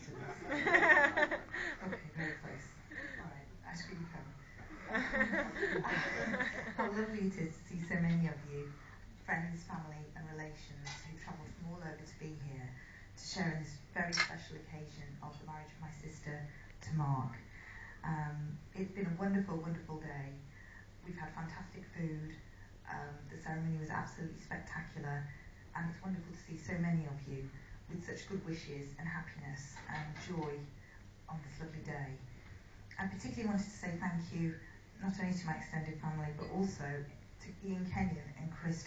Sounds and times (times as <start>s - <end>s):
Female speech, woman speaking: 0.0s - 17.4s, 18.0s - 30.7s, 31.3s - 32.3s, 33.0s - 38.8s
Narration, monologue: 0.0s - 38.8s.